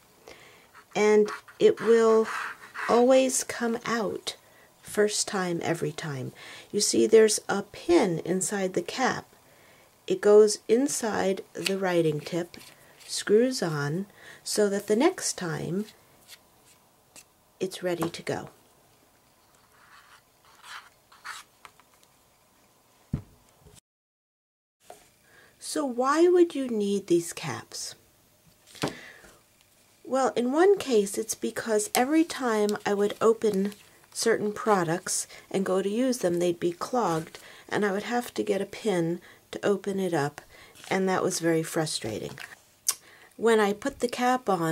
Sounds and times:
Speech: 1.0s - 9.3s, 10.1s - 15.9s, 17.6s - 18.6s, 25.6s - 28.0s, 30.1s - 42.6s, 43.4s - 44.7s.

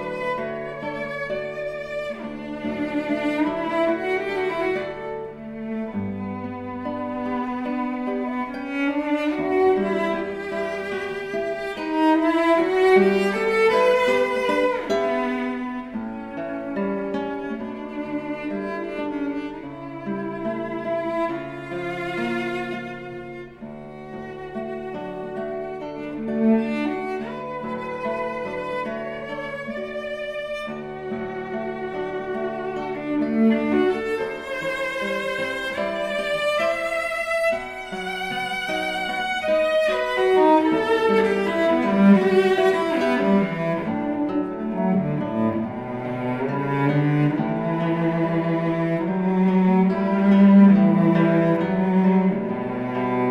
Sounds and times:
Acoustic guitar: 0.0s - 53.3s
Strum: 0.0s - 53.3s.

